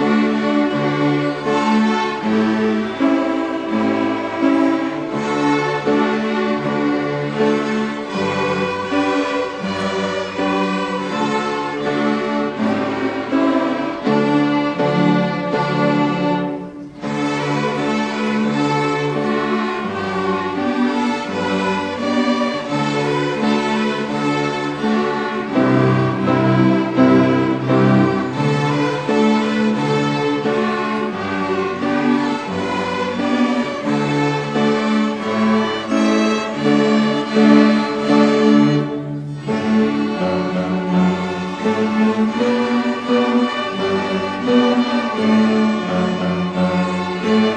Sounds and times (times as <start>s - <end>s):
Music: 0.0s - 47.5s.